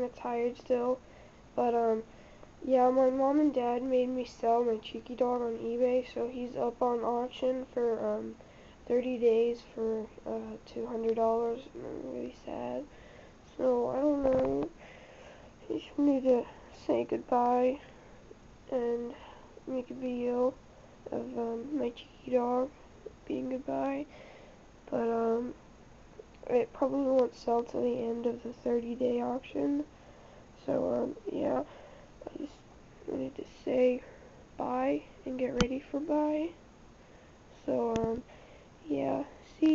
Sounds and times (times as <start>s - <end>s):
Speech: 0.0s - 1.0s, 1.6s - 12.9s, 13.5s - 14.8s, 15.6s - 17.9s, 18.7s - 24.1s, 24.9s - 25.6s, 26.4s - 29.9s, 30.6s - 36.6s, 37.6s - 39.7s.